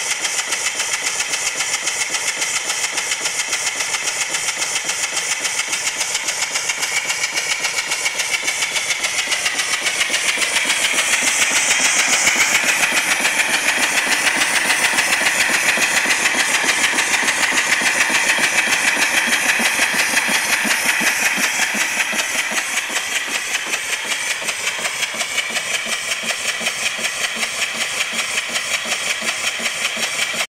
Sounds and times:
Idling: 0:00.0 - 0:30.5
Medium engine (mid frequency): 0:00.0 - 0:30.5.

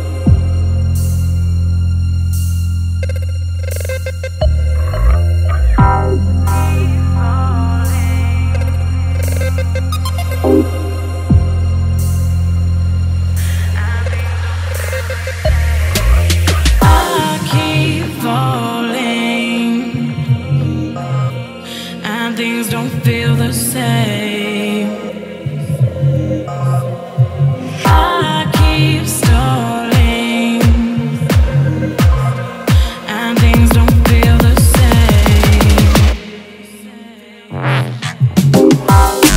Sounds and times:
Electronic music: 0:00.0 - 0:36.8, 0:37.5 - 0:39.3.

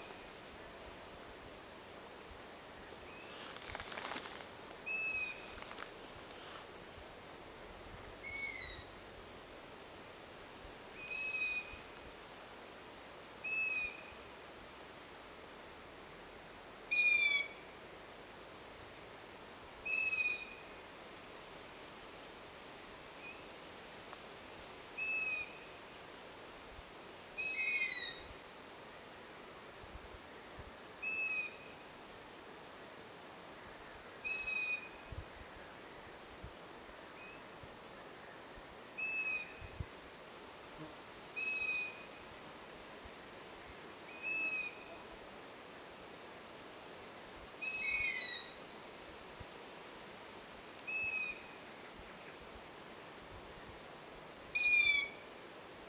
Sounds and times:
Owl: 0:04.9 - 0:05.7, 0:08.2 - 0:08.9, 0:11.0 - 0:11.9, 0:12.8 - 0:14.3, 0:16.9 - 0:17.8, 0:19.7 - 0:20.7, 0:25.0 - 0:26.6, 0:27.4 - 0:28.4, 0:31.0 - 0:32.5, 0:34.2 - 0:35.8, 0:38.6 - 0:39.8, 0:41.4 - 0:42.8, 0:44.1 - 0:46.0, 0:47.6 - 0:49.7, 0:50.9 - 0:51.7, 0:54.6 - 0:55.8.

